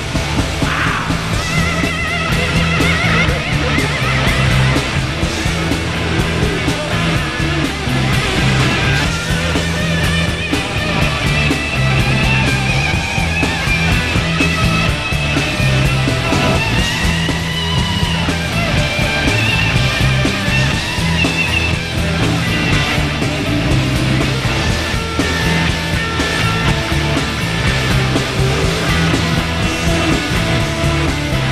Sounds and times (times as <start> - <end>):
Heavy metal: 0.0 - 31.5
Punk rock: 0.0 - 31.5.